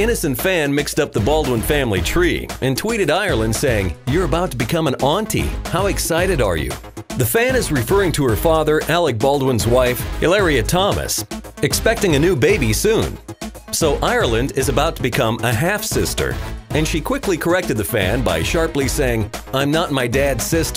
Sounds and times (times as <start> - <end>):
Music: 0.0 - 20.7
Speech: 0.0 - 20.7.